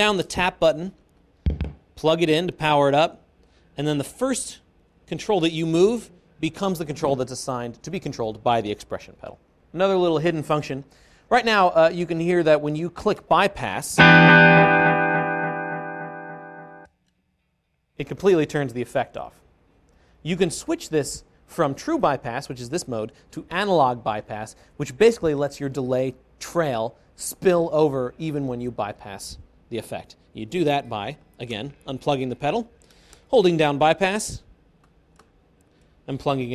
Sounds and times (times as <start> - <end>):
Speech: 0.0 - 1.0, 2.0 - 3.2, 3.8 - 14.0, 18.0 - 19.4, 20.2 - 34.5, 36.1 - 36.5
Effects unit: 14.0 - 16.9
Guitar: 14.0 - 16.9.